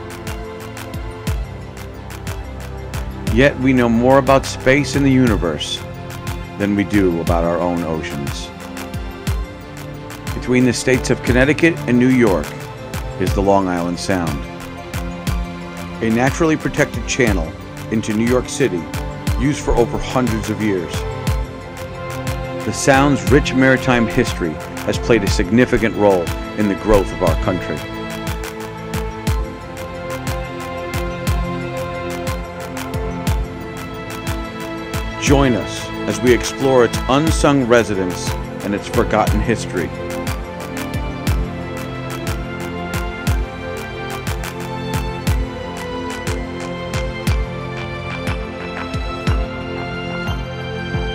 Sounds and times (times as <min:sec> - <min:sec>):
Music: 0:00.0 - 0:51.1
Speech: 0:03.3 - 0:05.8, 0:06.6 - 0:08.5, 0:10.4 - 0:12.6, 0:13.2 - 0:14.5, 0:16.0 - 0:21.0, 0:22.7 - 0:27.9, 0:35.2 - 0:40.0.